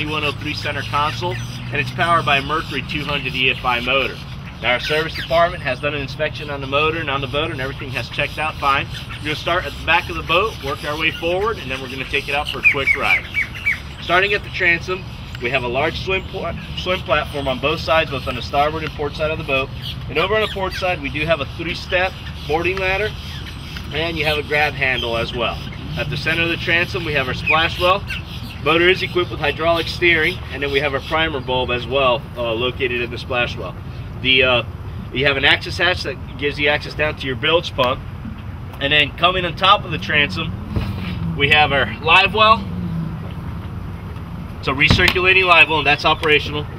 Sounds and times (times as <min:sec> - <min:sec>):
Speech: 0:00.0 - 0:13.2, 0:14.0 - 0:23.1, 0:23.9 - 0:28.0, 0:28.6 - 0:38.0, 0:38.8 - 0:40.5, 0:41.4 - 0:42.7, 0:44.6 - 0:46.7.